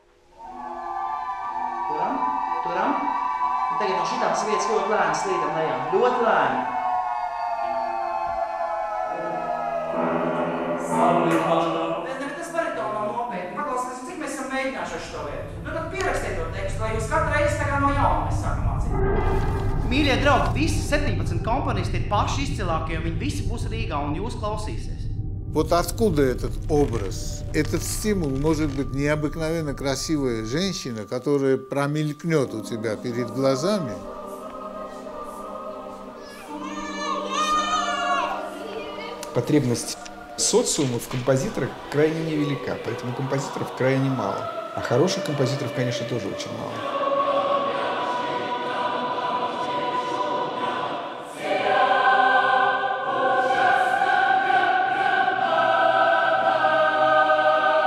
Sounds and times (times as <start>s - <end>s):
Inside, large room or hall: 0.0s - 21.3s, 25.6s - 57.8s
Speech: 19.9s - 24.9s, 25.6s - 34.0s, 39.2s - 46.8s.